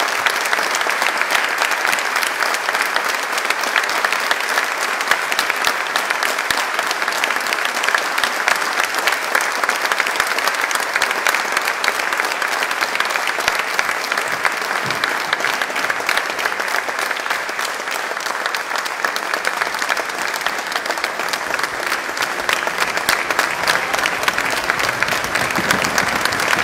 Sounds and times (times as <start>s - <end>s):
Applause: 0.0s - 26.6s.